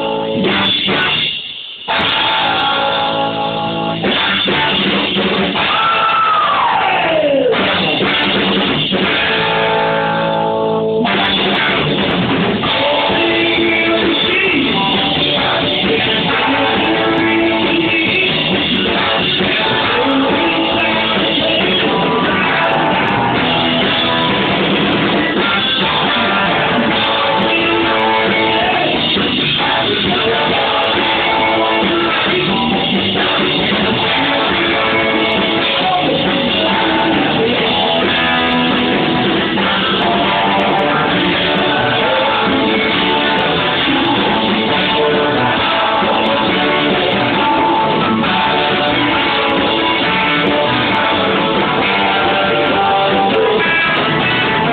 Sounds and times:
Music: 0.0 - 54.7
Singing: 12.6 - 54.7.

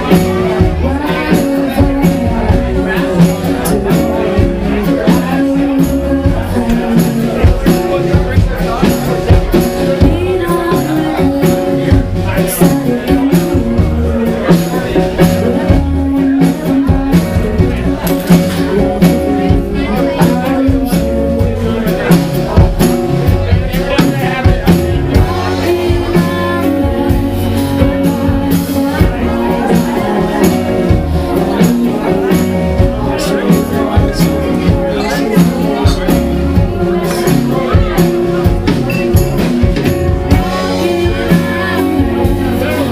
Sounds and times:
Music: 0.0 - 42.9
Speech: 0.0 - 42.9.

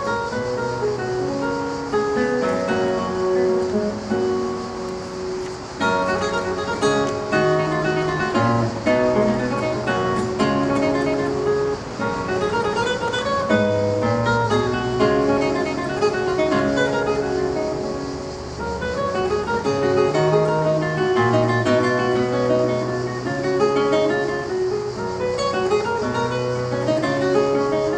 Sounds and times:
Music: 0.0 - 27.9.

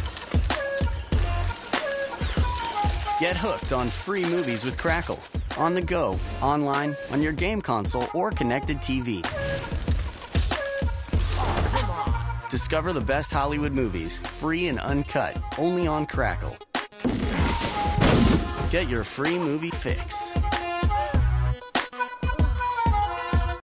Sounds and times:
Music: 0.0 - 23.6
Speech: 3.2 - 9.4, 12.5 - 16.6, 18.7 - 20.4.

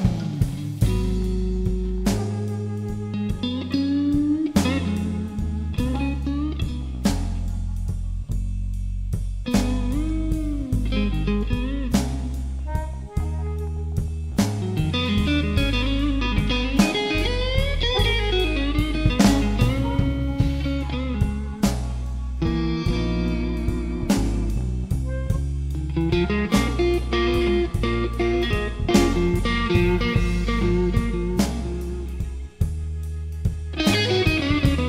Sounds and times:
Music: 0.0 - 34.8.

